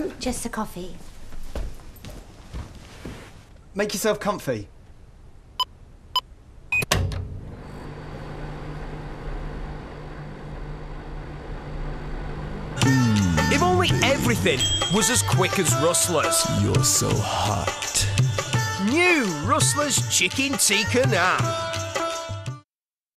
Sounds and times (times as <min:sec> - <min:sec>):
Speech: 0:03.8 - 0:04.7, 0:13.1 - 0:17.8
Music: 0:12.8 - 0:22.7.